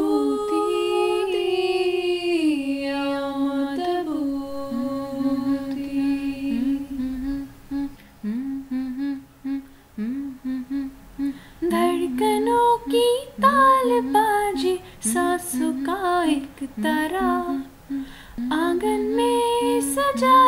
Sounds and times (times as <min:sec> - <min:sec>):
Singing: 0:00.0 - 0:20.4.